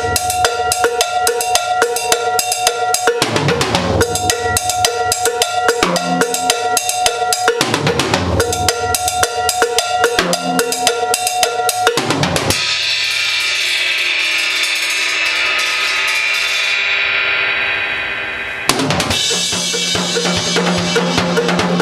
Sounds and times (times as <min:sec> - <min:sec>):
Music: 0:00.0 - 0:21.8.